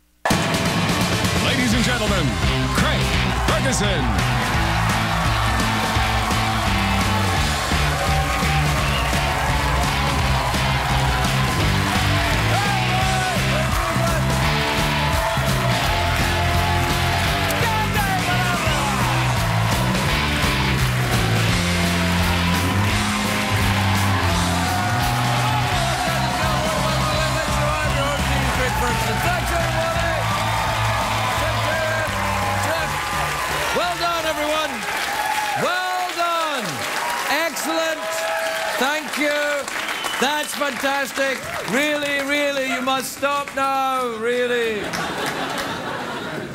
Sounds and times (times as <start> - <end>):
Music: 0.2 - 34.9.